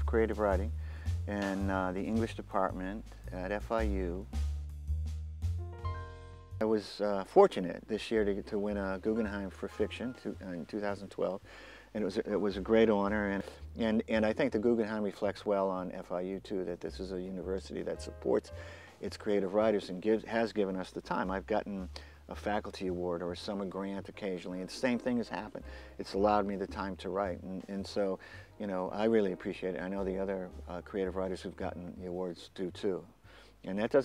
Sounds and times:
Speech: 0.0 - 4.3, 6.6 - 34.0
Music: 0.0 - 34.0.

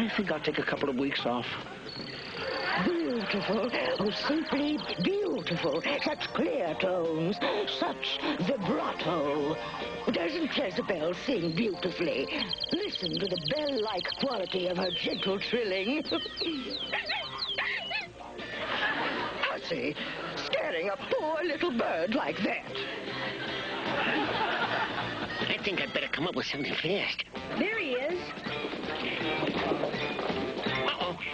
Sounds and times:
Speech: 0.0 - 1.6, 2.8 - 16.4.

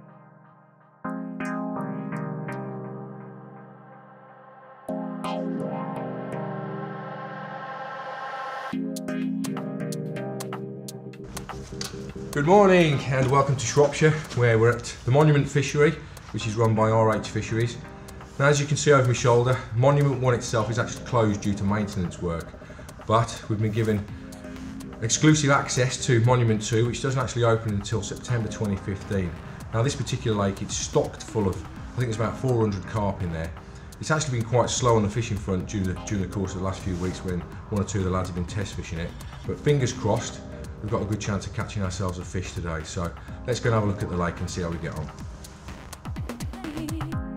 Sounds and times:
Music: 0.0 - 47.3
Speech: 12.4 - 22.5, 23.1 - 24.1, 25.0 - 45.2.

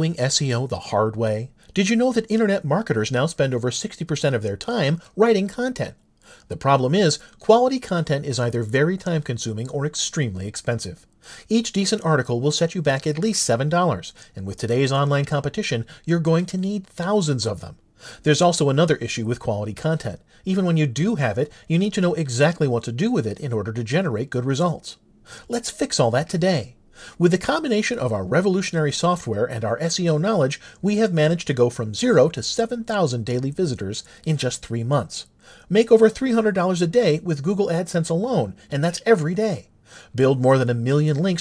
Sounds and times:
Speech: 0.0 - 41.4.

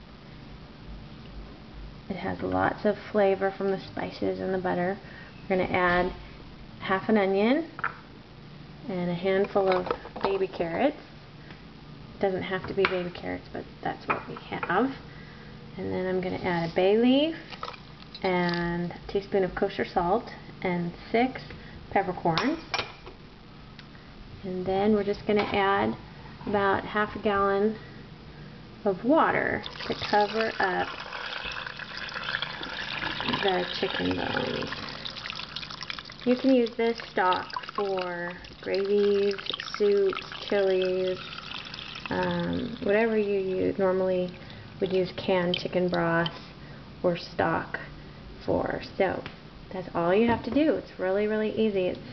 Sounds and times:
Speech: 2.1 - 6.2, 8.9 - 11.0, 15.8 - 17.4, 18.3 - 22.6, 24.4 - 27.8, 28.9 - 30.9, 33.4 - 34.7, 42.1 - 46.4, 47.1 - 52.0.

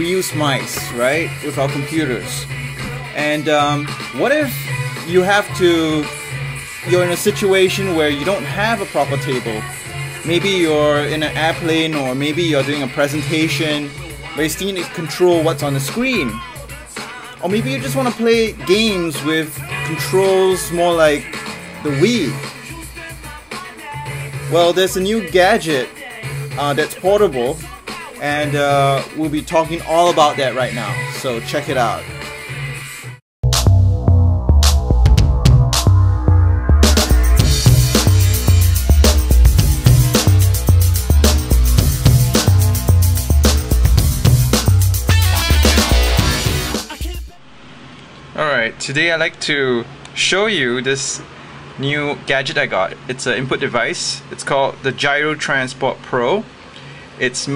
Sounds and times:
Speech: 0.0 - 2.5, 3.2 - 6.1, 6.9 - 9.7, 10.3 - 16.5, 17.4 - 22.5, 24.5 - 32.1, 48.4 - 56.5, 57.2 - 57.5
Music: 0.0 - 47.4.

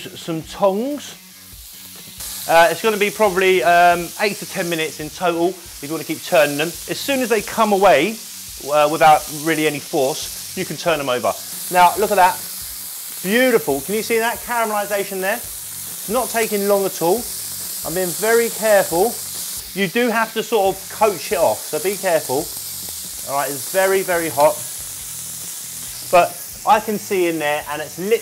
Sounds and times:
Speech: 0.0 - 1.2, 2.5 - 12.4, 13.2 - 15.4, 16.1 - 17.3, 17.9 - 19.2, 19.8 - 22.5, 23.2 - 24.7, 26.1 - 28.2.

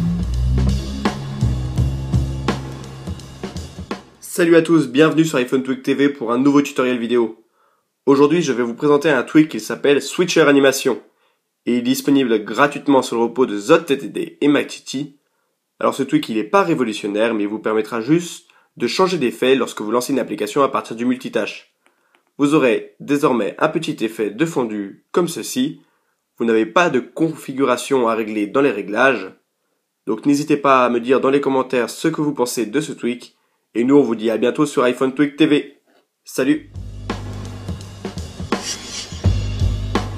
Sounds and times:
Speech: 4.2 - 7.4, 8.1 - 15.2, 15.8 - 21.7, 22.4 - 25.8, 26.4 - 29.4, 30.1 - 36.7.

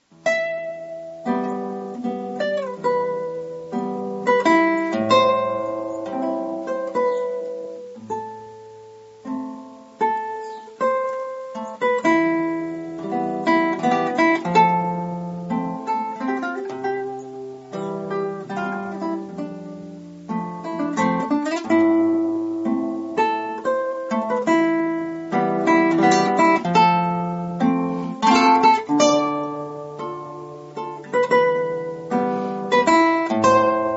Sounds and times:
Acoustic guitar: 0.0 - 33.9
Strum: 0.0 - 33.9.

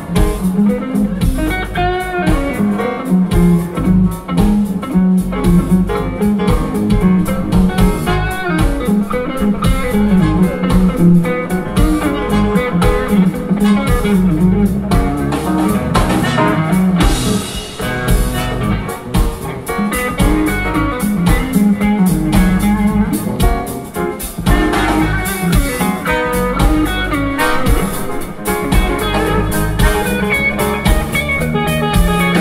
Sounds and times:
Electric guitar: 0.0 - 32.4.

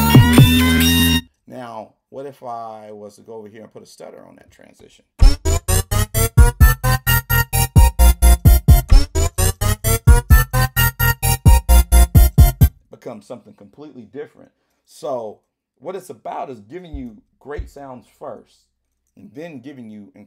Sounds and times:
Synthesizer: 0.0 - 1.2, 5.2 - 12.7
Speech: 1.5 - 5.1, 12.9 - 20.2.

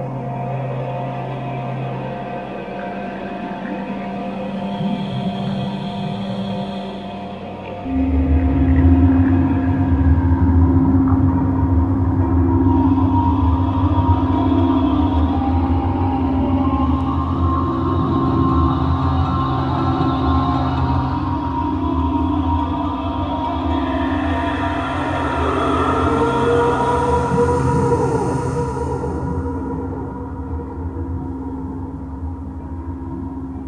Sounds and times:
Music: 0.0 - 33.6.

